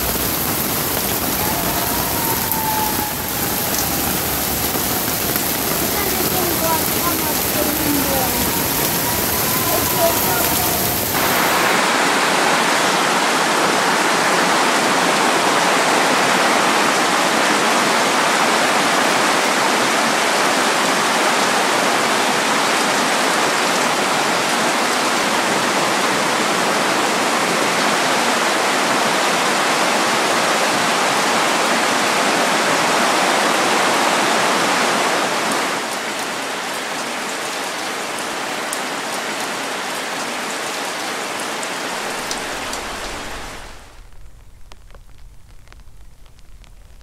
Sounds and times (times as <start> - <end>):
Raindrop: 0.0 - 13.4, 41.4 - 47.0
Rain on surface: 0.0 - 47.0.